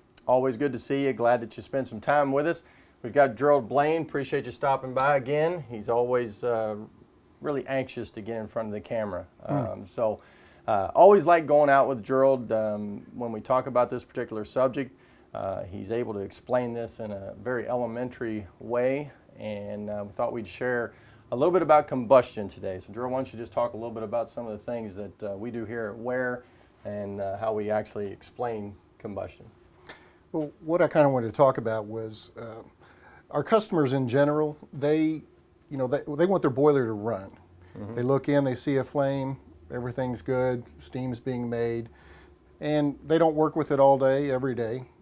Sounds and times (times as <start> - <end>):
Speech: 0.2 - 29.6, 30.4 - 41.9, 42.6 - 45.0.